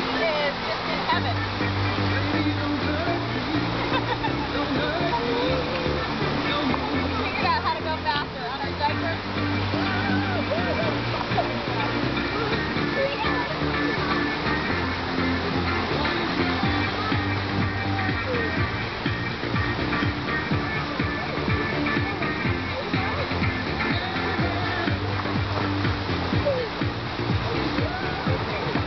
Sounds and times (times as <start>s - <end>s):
Music: 0.0s - 28.8s
Stream: 0.0s - 28.8s
Waterfall: 0.0s - 28.8s
Gurgling: 1.2s - 28.8s
Speech: 5.1s - 10.9s.